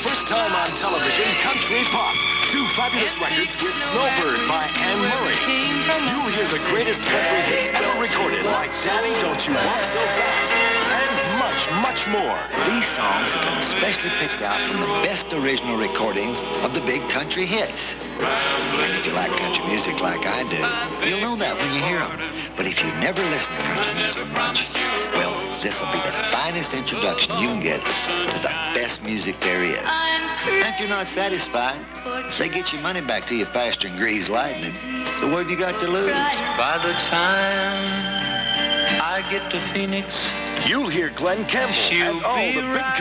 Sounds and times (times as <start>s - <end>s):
Speech: 0.0s - 18.0s, 18.8s - 24.6s, 25.2s - 37.3s, 38.9s - 43.0s
Bluegrass: 0.0s - 43.0s.